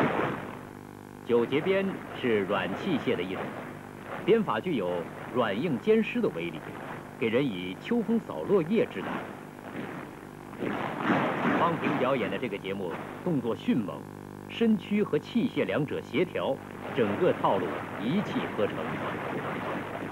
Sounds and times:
Speech: 1.3 - 3.5, 4.3 - 9.2, 11.6 - 19.3.

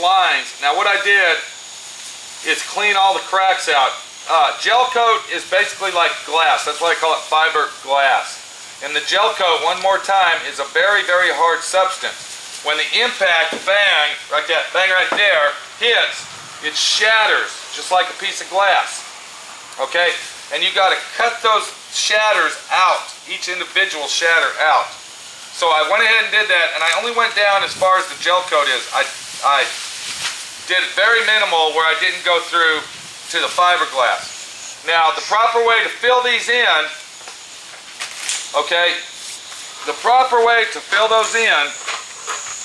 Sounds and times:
Speech: 0.0 - 1.6, 2.4 - 19.1, 19.8 - 29.8, 30.7 - 37.1, 38.5 - 39.2, 39.8 - 41.9.

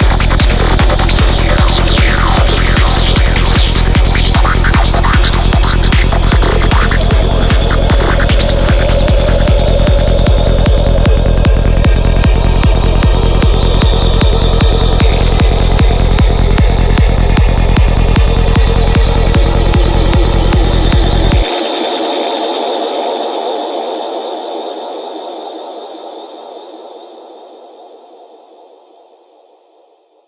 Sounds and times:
House music: 0.0 - 22.1.

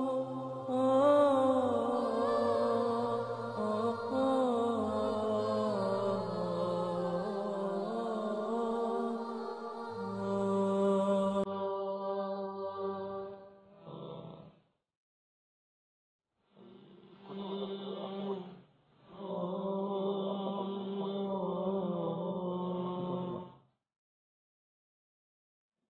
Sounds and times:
Mantra: 0.0 - 14.5, 16.6 - 23.6.

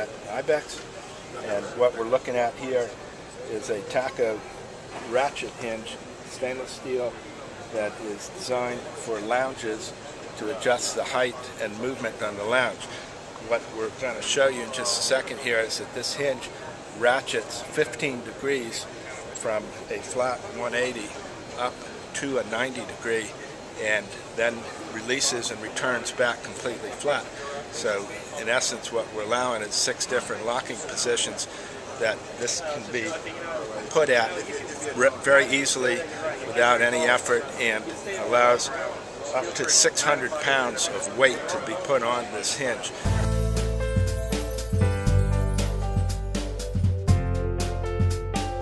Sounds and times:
Speech: 0.0 - 43.1.

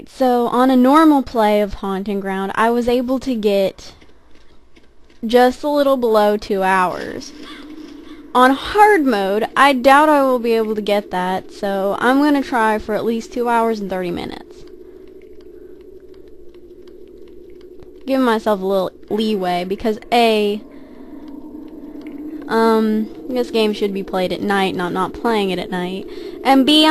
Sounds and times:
Speech: 0.0 - 4.0, 5.2 - 7.4, 8.4 - 14.6, 18.1 - 20.6, 22.5 - 26.9.

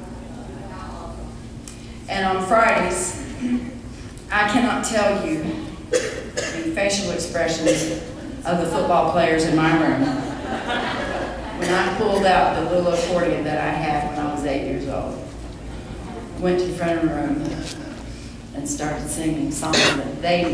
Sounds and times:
Speech: 2.1 - 3.3, 4.3 - 5.7, 6.5 - 10.2, 11.6 - 15.2, 16.4 - 17.8, 18.6 - 20.5.

